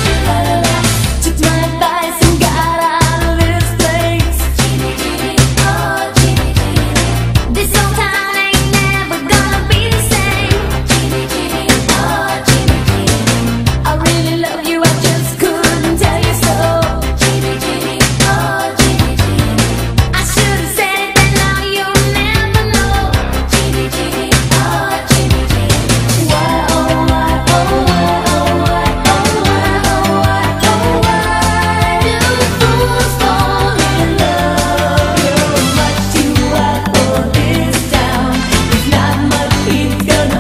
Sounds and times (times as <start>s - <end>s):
Exciting music: 0.0s - 40.4s.